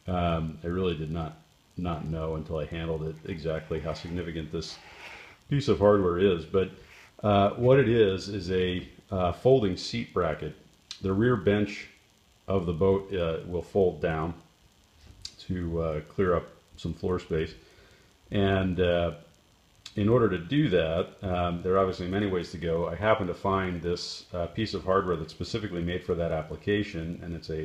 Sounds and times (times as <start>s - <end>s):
Speech: 0.0s - 4.9s, 5.5s - 14.5s, 15.3s - 17.6s, 18.3s - 19.3s, 19.9s - 27.6s.